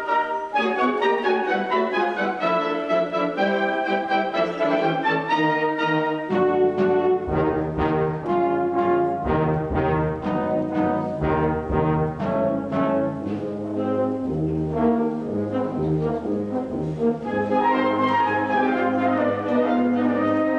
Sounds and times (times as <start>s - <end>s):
Traditional music: 0.0s - 16.2s, 17.0s - 20.5s.